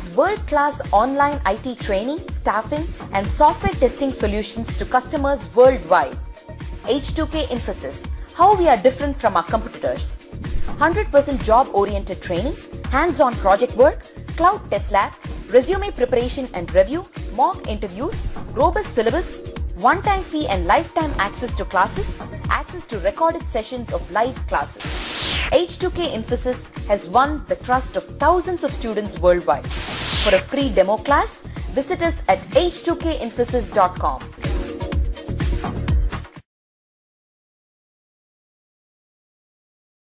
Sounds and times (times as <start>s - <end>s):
Speech: 0.0s - 6.2s, 6.9s - 10.2s, 10.8s - 24.8s, 25.5s - 29.7s, 30.3s - 34.3s
Music: 0.0s - 36.5s.